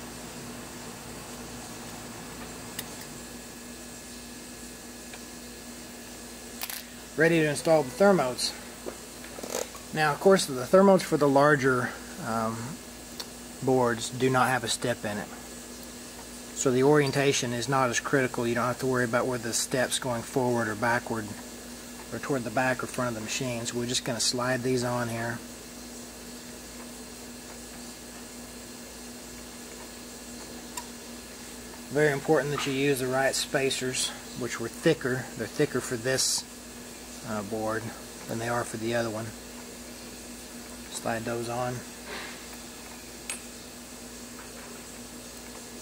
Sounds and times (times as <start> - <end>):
Speech: 7.2 - 8.6, 9.9 - 12.8, 13.6 - 15.4, 16.6 - 21.4, 22.1 - 25.5, 31.9 - 36.5, 37.2 - 39.4, 40.9 - 41.9.